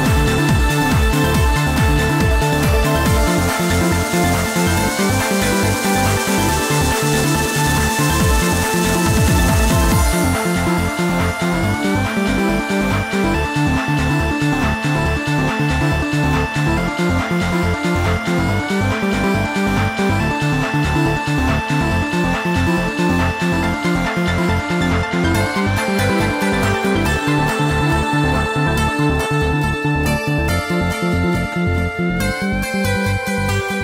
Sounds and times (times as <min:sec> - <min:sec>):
Trance music: 0:00.0 - 0:33.8
Video game music: 0:00.0 - 0:33.8.